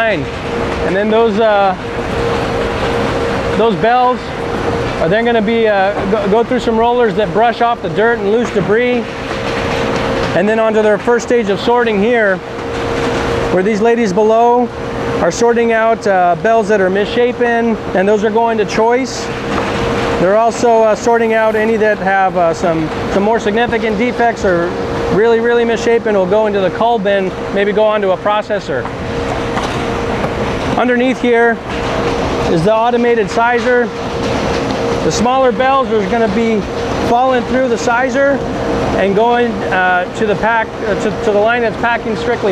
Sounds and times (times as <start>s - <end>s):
Speech: 0.0s - 1.8s, 3.6s - 4.3s, 5.0s - 9.1s, 10.4s - 12.4s, 13.5s - 19.3s, 20.2s - 28.9s, 30.8s - 31.6s, 32.5s - 34.0s, 35.0s - 38.4s, 39.0s - 42.5s.